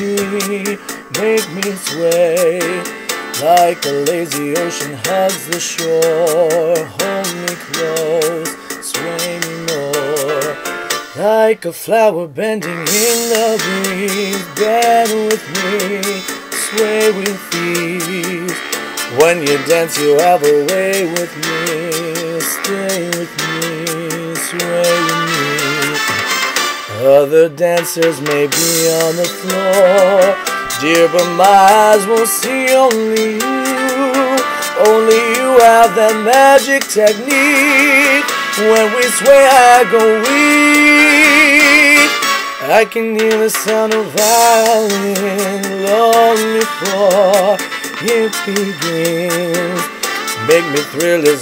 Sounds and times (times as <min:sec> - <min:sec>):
Male singing: 0:00.0 - 0:26.3, 0:26.9 - 0:51.4
Music: 0:00.0 - 0:51.4.